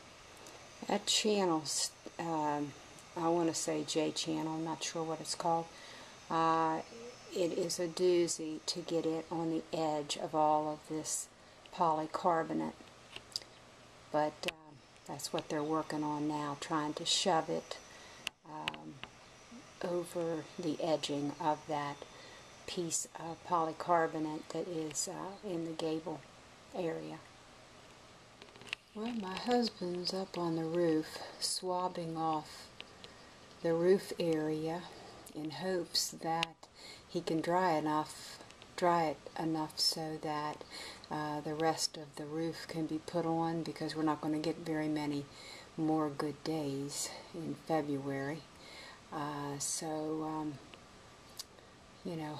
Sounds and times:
Speech: 0.8 - 5.7, 6.3 - 12.8, 14.2 - 17.8, 18.5 - 19.0, 19.8 - 22.0, 22.7 - 27.3, 29.0 - 32.6, 33.6 - 48.5, 49.1 - 50.6, 52.1 - 52.3.

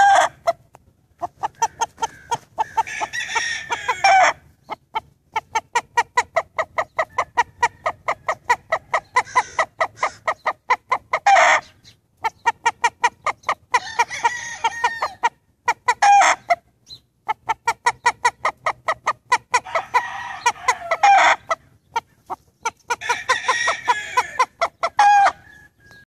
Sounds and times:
Crowing, cock-a-doodle-doo: 0.0 - 0.4, 2.1 - 4.4, 7.4 - 10.1, 13.8 - 15.3, 16.0 - 16.4, 19.6 - 21.5, 23.0 - 26.0
Cluck: 0.0 - 2.9, 4.1 - 13.8, 15.2 - 19.7, 20.9 - 23.1, 24.4 - 26.0.

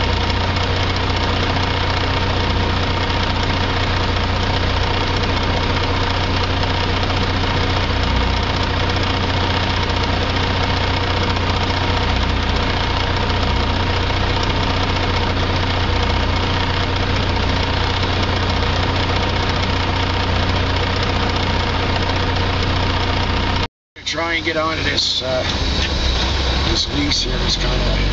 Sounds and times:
Idling: 0.0 - 28.1
Truck: 0.0 - 28.1.

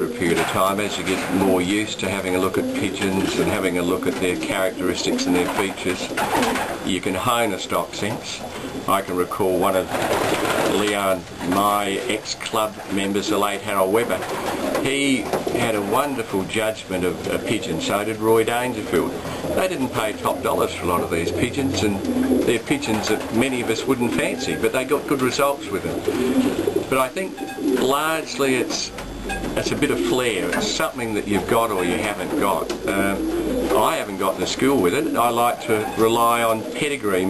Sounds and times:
Speech: 0.0 - 6.1, 6.9 - 10.0, 10.7 - 26.0, 26.9 - 29.0, 29.6 - 37.2.

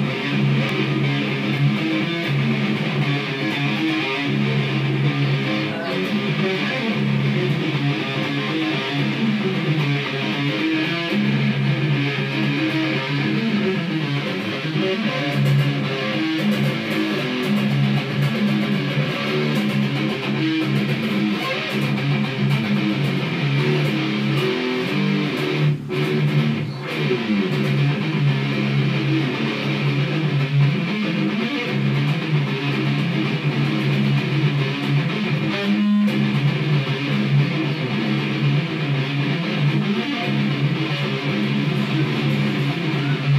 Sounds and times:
Music: 0.0 - 43.3.

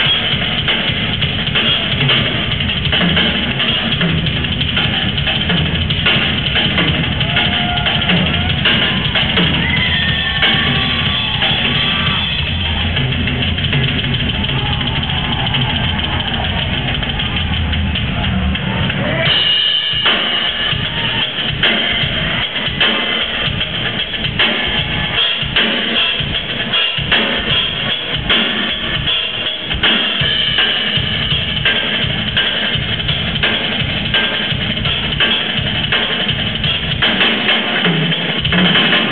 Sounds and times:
Bass drum: 0.0 - 39.1
Drum kit: 0.0 - 39.1.

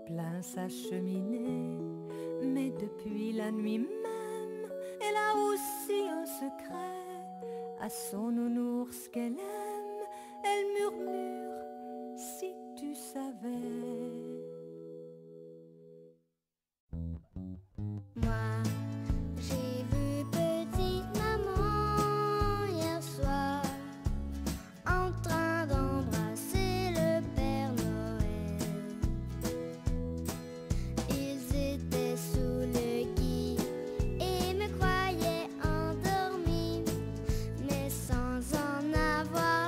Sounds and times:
Music: 0.0 - 16.2, 17.0 - 39.6.

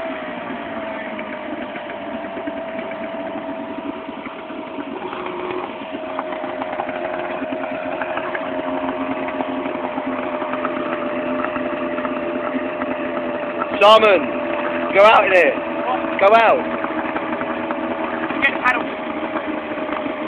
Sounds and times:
Motorboat, speedboat: 0.0 - 20.2.

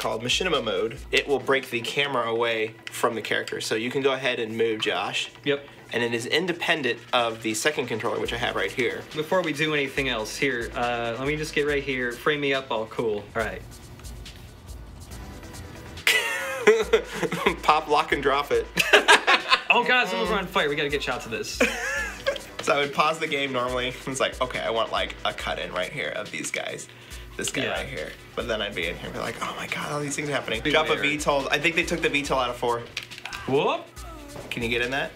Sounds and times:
Speech: 0.0 - 13.6, 19.7 - 21.6, 22.6 - 33.9, 34.5 - 35.1
Music: 0.0 - 35.1.

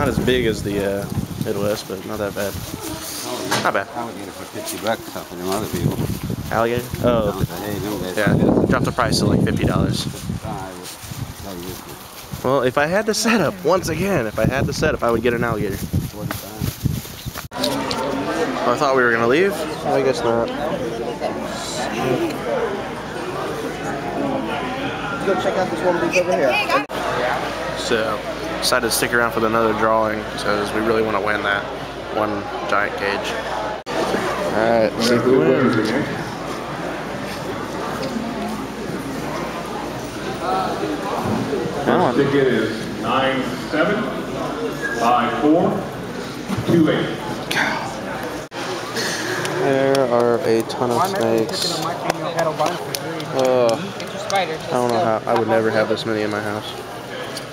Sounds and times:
Inside, public space: 0.0 - 57.5.

